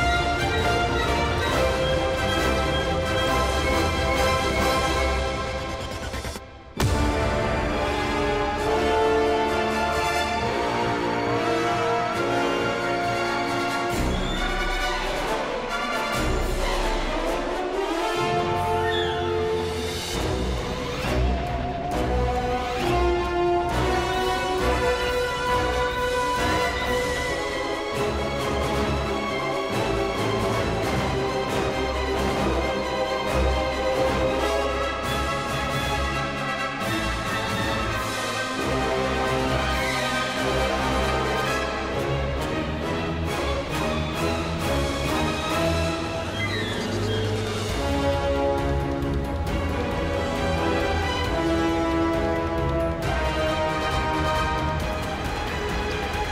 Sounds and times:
Music: 0.0 - 56.3.

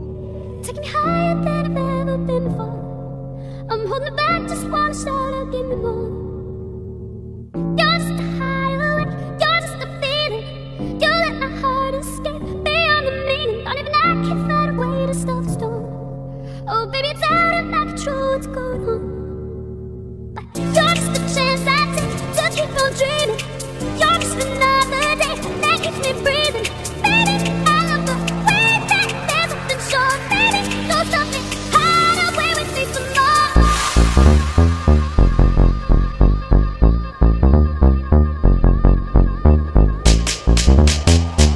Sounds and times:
Music: 0.0 - 41.5.

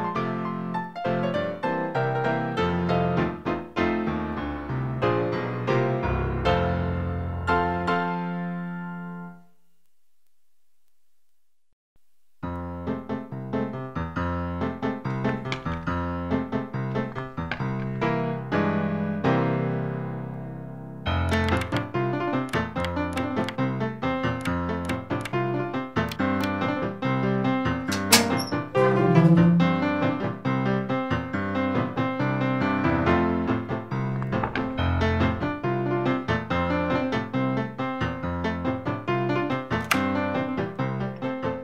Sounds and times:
Music: 0.0 - 9.6, 12.4 - 41.6.

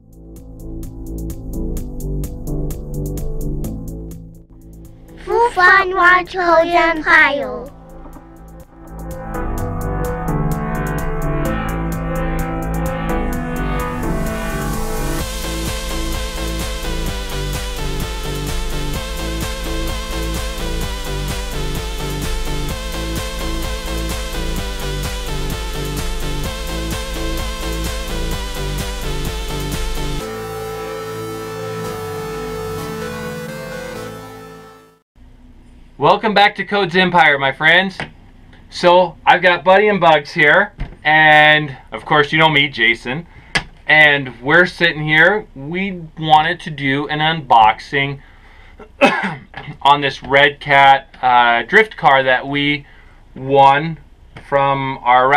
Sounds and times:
Music: 0.0 - 35.1
Speech: 5.2 - 7.7, 36.0 - 38.1, 38.7 - 43.3, 43.9 - 48.2, 49.7 - 52.8, 53.4 - 55.3.

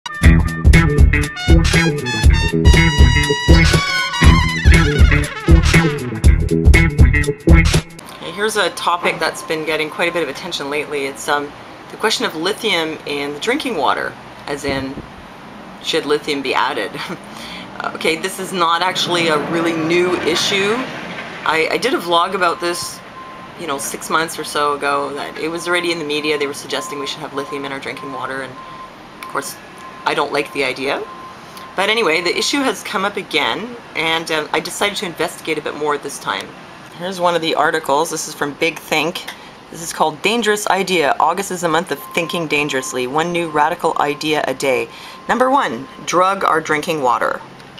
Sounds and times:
Music: 0.1 - 8.0
Speech: 8.1 - 15.0, 15.8 - 17.2, 17.8 - 23.0, 23.6 - 28.6, 29.2 - 31.1, 31.8 - 47.5.

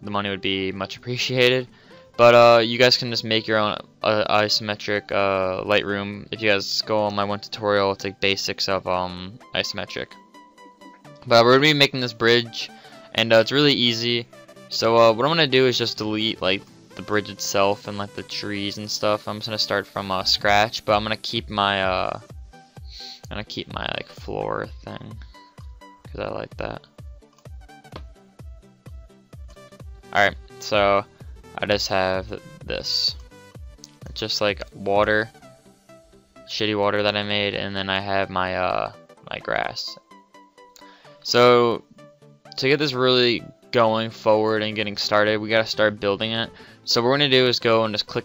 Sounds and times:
Speech: 0.0 - 10.2, 11.2 - 22.2, 23.0 - 25.3, 26.1 - 26.8, 30.1 - 33.2, 34.0 - 35.3, 36.5 - 40.0, 41.2 - 41.8, 42.6 - 48.2
Music: 0.0 - 48.2.

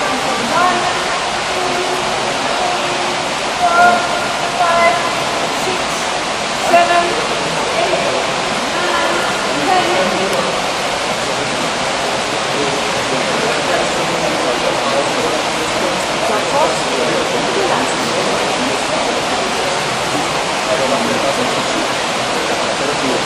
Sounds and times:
Speech: 0.0 - 23.2.

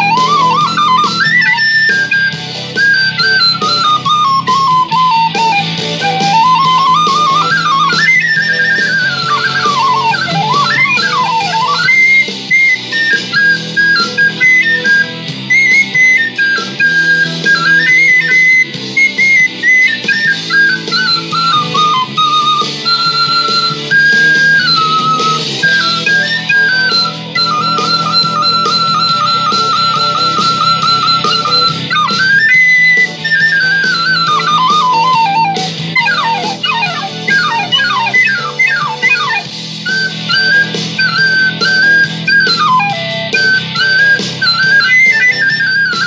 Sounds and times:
Flute: 0.0 - 46.0.

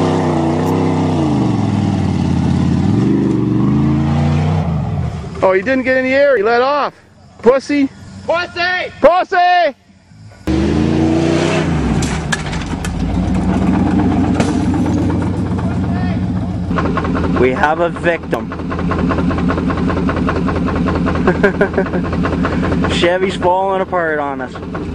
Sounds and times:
Truck: 0.0 - 9.2, 9.9 - 24.9
Speech: 5.4 - 9.8, 15.8 - 16.2, 17.4 - 18.5, 22.9 - 24.6.

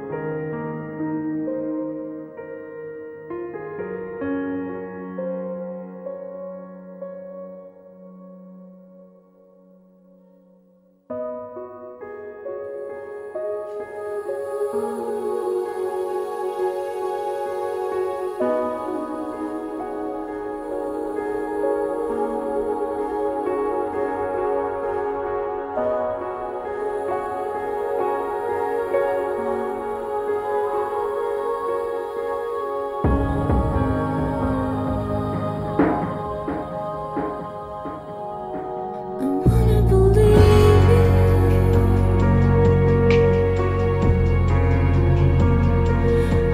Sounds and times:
Music: 0.0 - 46.5.

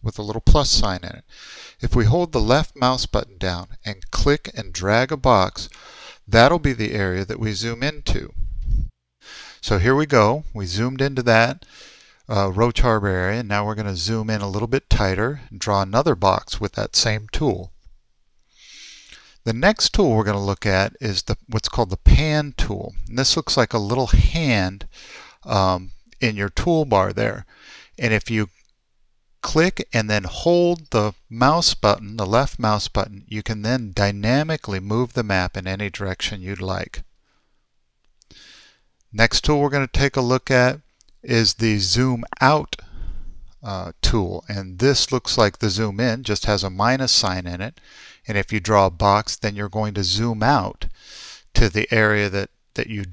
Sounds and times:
Speech: 0.0 - 8.4, 9.6 - 11.7, 12.3 - 17.7, 19.5 - 28.6, 29.4 - 37.1, 39.1 - 42.8, 43.6 - 51.0, 51.6 - 53.1.

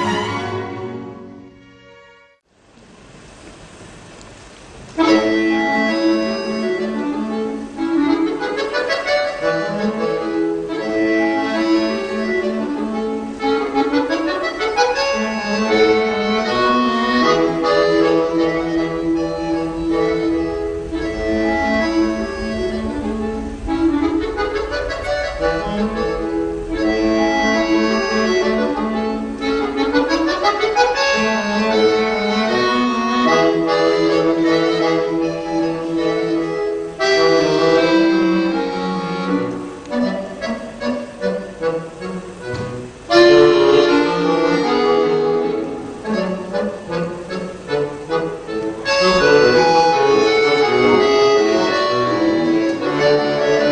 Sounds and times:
Accordion: 0.0 - 2.4, 4.9 - 53.7.

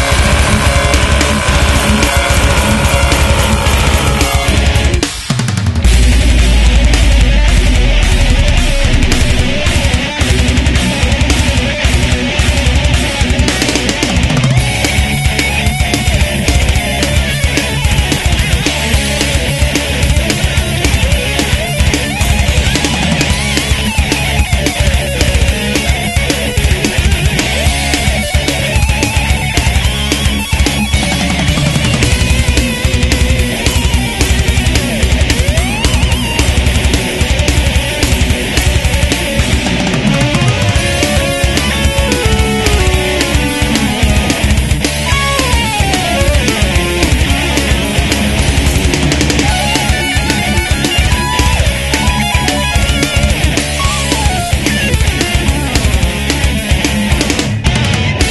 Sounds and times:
Guitar: 0.0 - 58.3.

